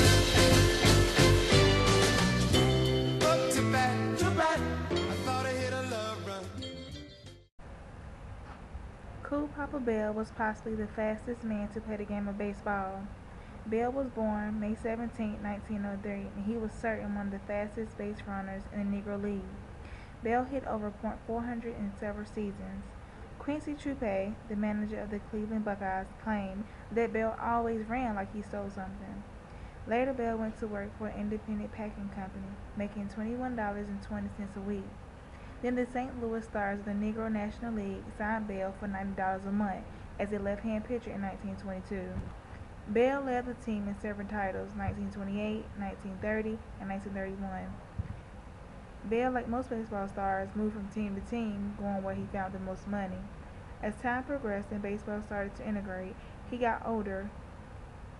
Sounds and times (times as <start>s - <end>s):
Speech: 9.2s - 19.6s, 20.2s - 29.2s, 29.9s - 34.9s, 35.6s - 42.3s, 42.9s - 47.8s, 49.1s - 57.3s.